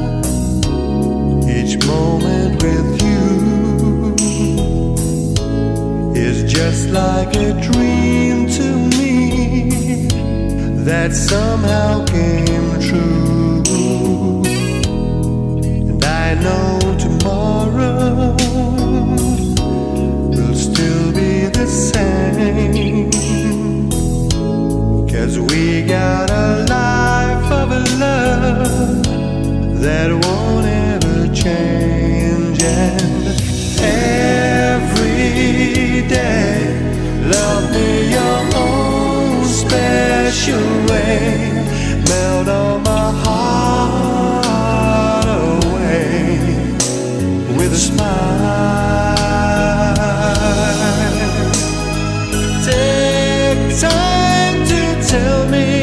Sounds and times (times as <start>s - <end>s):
Soul music: 0.0s - 55.8s.